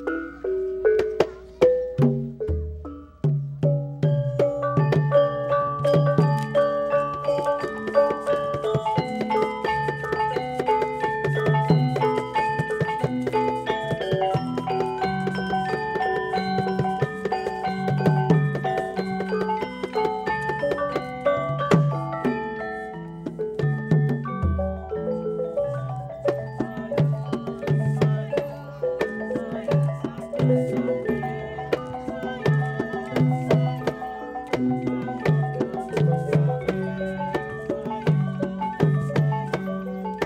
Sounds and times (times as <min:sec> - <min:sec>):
Music: 0:00.0 - 0:40.2.